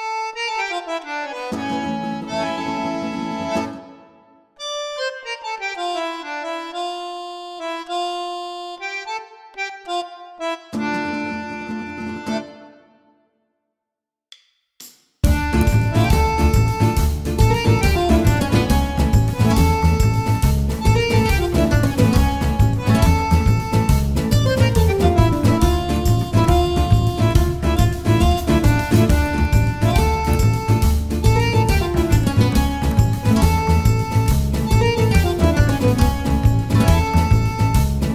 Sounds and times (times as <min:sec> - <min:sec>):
Music: 0:00.0 - 0:13.8, 0:14.8 - 0:38.1.